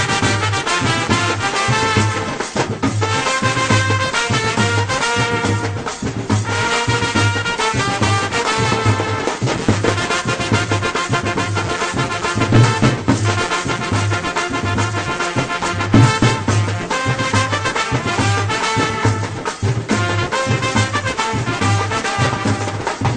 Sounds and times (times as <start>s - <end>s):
Music: 0.0s - 23.1s.